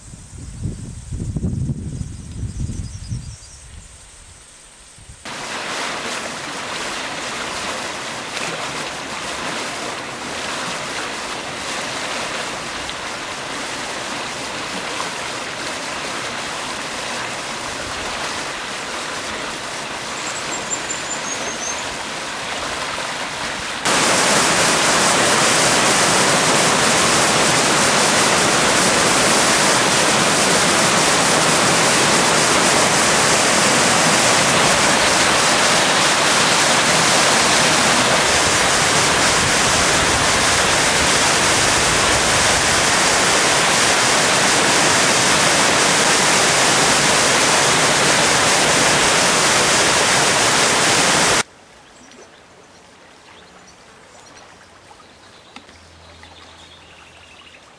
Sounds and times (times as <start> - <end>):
Stream: 1.2 - 57.7.